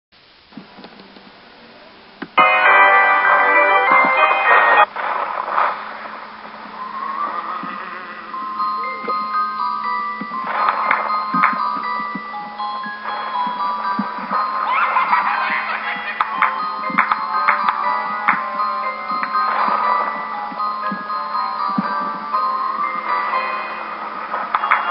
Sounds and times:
Glockenspiel: 2.4 - 4.9, 6.7 - 24.9
Marimba, xylophone: 2.4 - 4.9, 7.2 - 24.9.

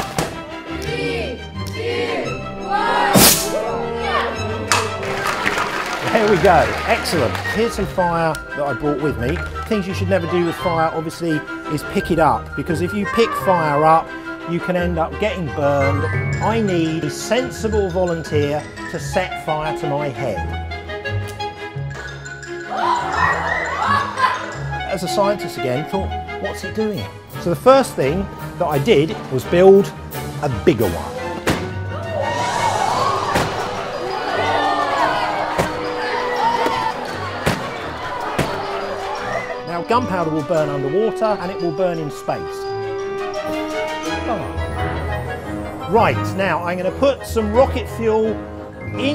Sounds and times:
Music: 0.0 - 49.1.

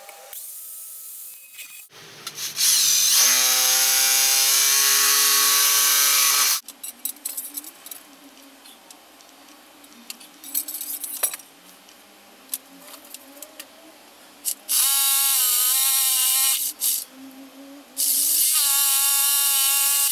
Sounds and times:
Drill: 2.5 - 6.6, 14.7 - 17.0, 18.0 - 20.1.

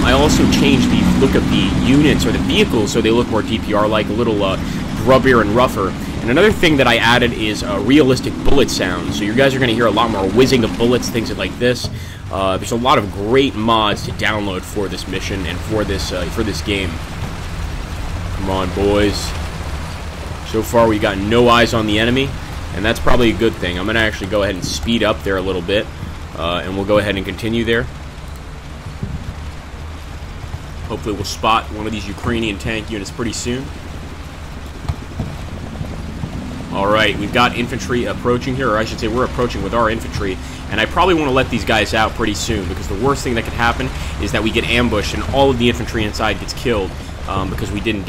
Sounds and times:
Speech: 0.0 - 17.1, 18.4 - 19.4, 20.4 - 27.9, 30.9 - 33.7, 36.7 - 48.0.

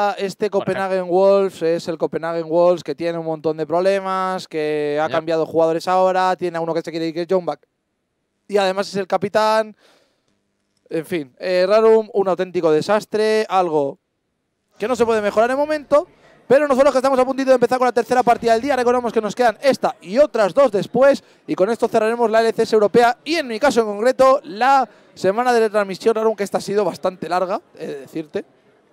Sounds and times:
Speech: 0.0 - 7.6, 8.5 - 9.8, 10.9 - 14.0, 14.8 - 28.5.

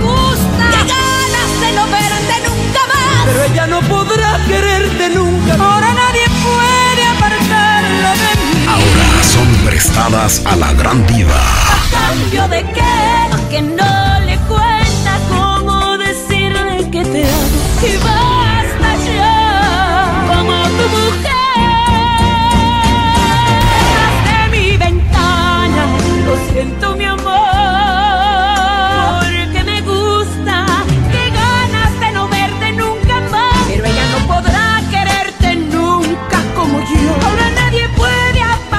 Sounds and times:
Music: 0.0 - 38.7
Speech: 8.7 - 12.4.

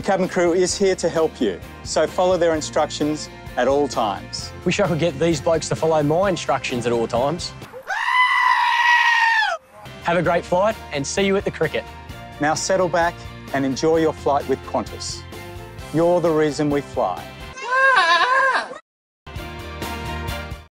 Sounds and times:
Speech: 0.0 - 7.6, 10.0 - 15.2, 15.9 - 17.3
Music: 0.0 - 7.7, 9.6 - 17.6, 19.3 - 20.7
Goat: 7.8 - 9.6, 17.6 - 18.8.

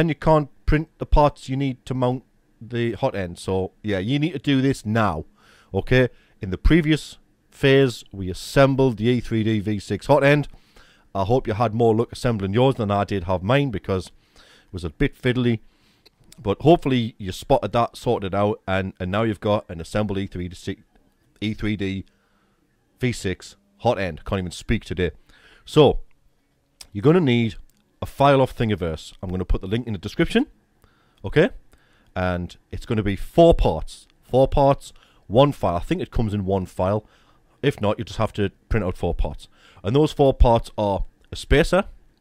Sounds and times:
Speech: 0.0 - 10.5, 11.2 - 15.6, 16.4 - 22.1, 23.0 - 26.1, 26.8 - 30.6, 31.2 - 31.6, 32.2 - 42.0.

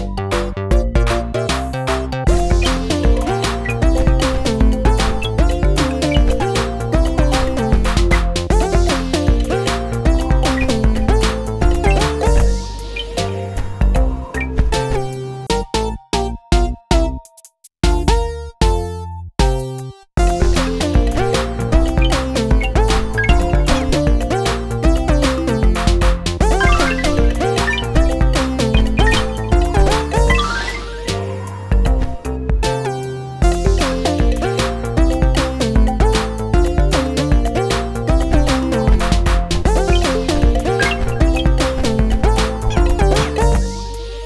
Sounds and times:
Music: 0.0 - 44.2.

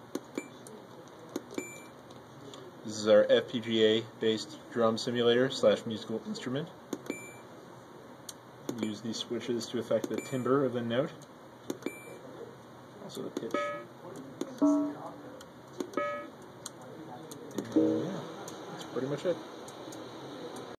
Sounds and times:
Speech: 2.4 - 6.8, 8.7 - 11.2, 12.1 - 15.5, 16.7 - 20.7
Sampler: 14.6 - 15.1.

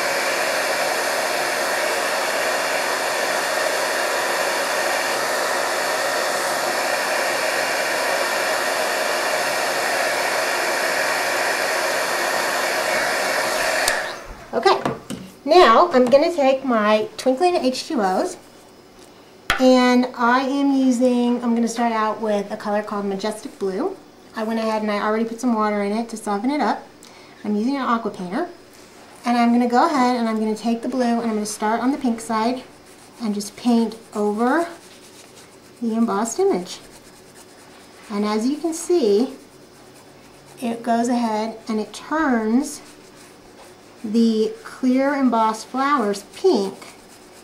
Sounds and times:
Hair dryer: 0.0 - 14.6.

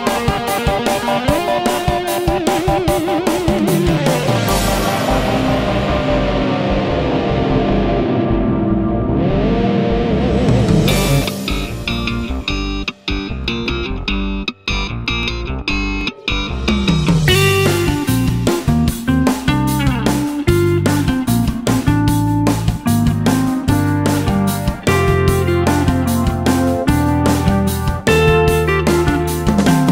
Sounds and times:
Strum: 2.4 - 29.9.

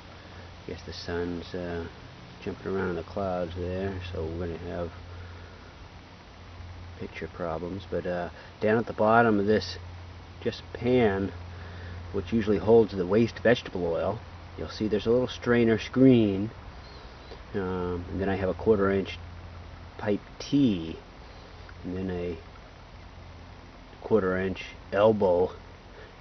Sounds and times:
Speech: 0.7 - 5.0, 7.0 - 9.8, 10.4 - 11.4, 12.1 - 16.6, 17.5 - 19.2, 20.0 - 21.0, 21.8 - 22.4, 24.0 - 25.6.

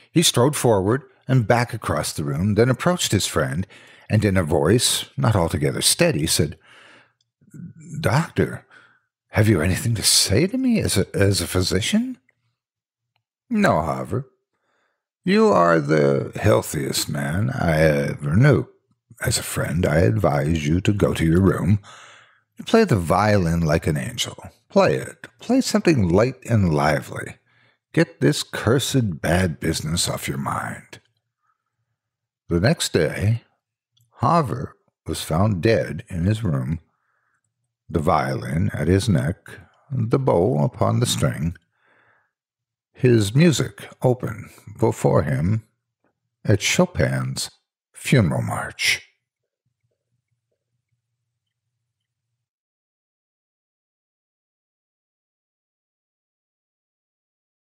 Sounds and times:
Speech: 0.0 - 6.6, 7.6 - 8.7, 9.4 - 12.2, 13.5 - 14.3, 15.3 - 22.0, 22.6 - 27.4, 28.0 - 31.0, 32.5 - 33.5, 34.2 - 36.8, 37.9 - 41.6, 43.0 - 45.7, 46.5 - 49.0.

